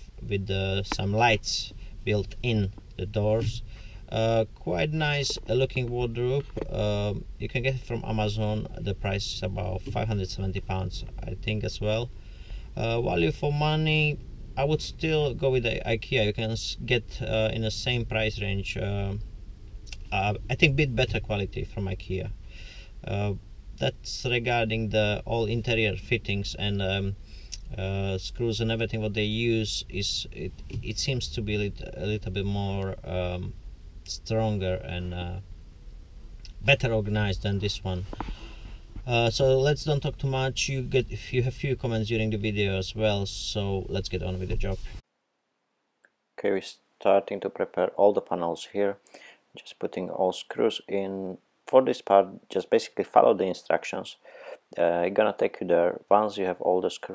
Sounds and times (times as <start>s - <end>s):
Speech: 0.0s - 12.1s, 12.8s - 19.2s, 19.9s - 22.4s, 23.0s - 35.4s, 36.5s - 38.2s, 39.0s - 45.0s, 46.4s - 49.0s, 49.6s - 57.1s.